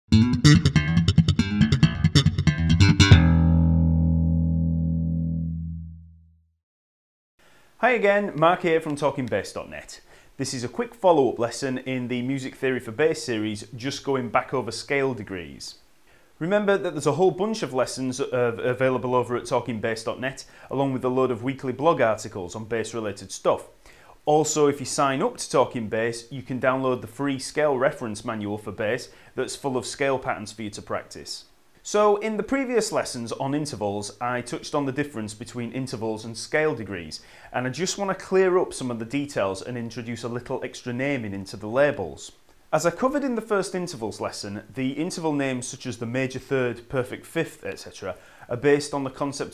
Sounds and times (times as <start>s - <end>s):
Bass guitar: 0.1s - 6.5s.